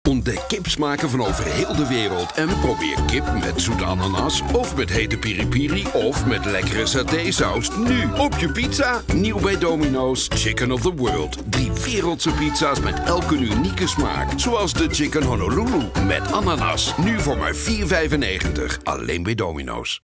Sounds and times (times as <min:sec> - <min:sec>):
Music: 0:00.1 - 0:19.8
Speech: 0:00.1 - 0:20.0.